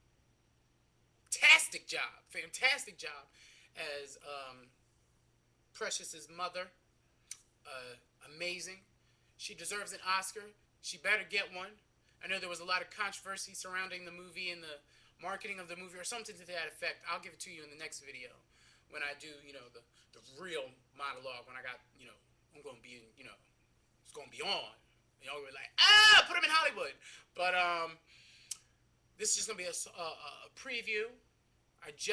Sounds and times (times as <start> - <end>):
Speech: 1.3 - 4.7, 5.8 - 6.8, 7.7 - 23.4, 24.0 - 28.0, 29.2 - 31.2, 31.8 - 32.1.